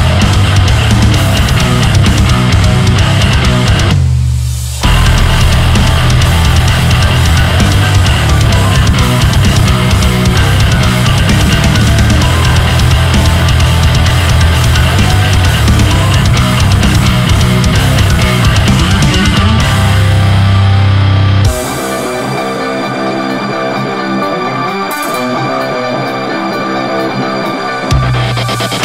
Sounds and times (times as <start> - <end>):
Music: 0.0 - 28.8.